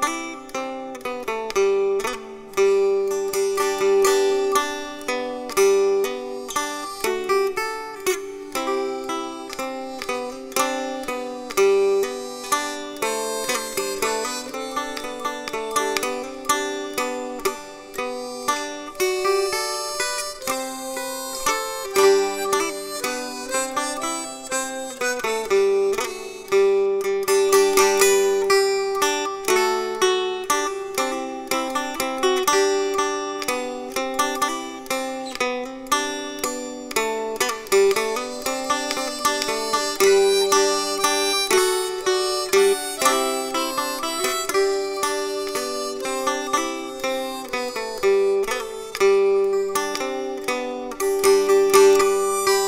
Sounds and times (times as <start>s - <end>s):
Mandolin: 0.0s - 52.6s.